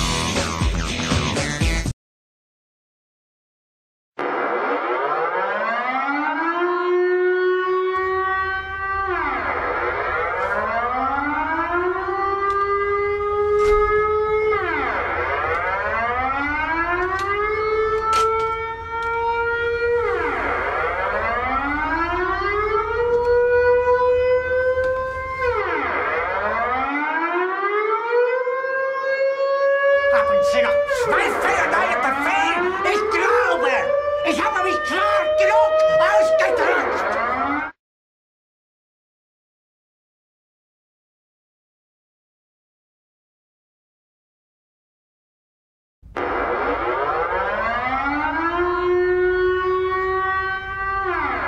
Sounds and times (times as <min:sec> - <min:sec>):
Speech: 0:30.1 - 0:37.2.